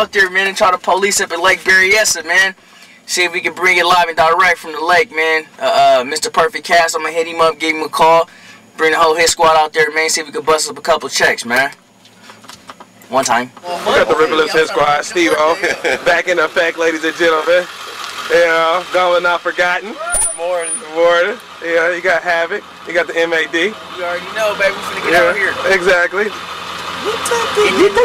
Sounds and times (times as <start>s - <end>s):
Speech: 0.0s - 11.8s, 13.1s - 17.7s, 18.3s - 26.4s
Vehicle: 0.0s - 28.0s.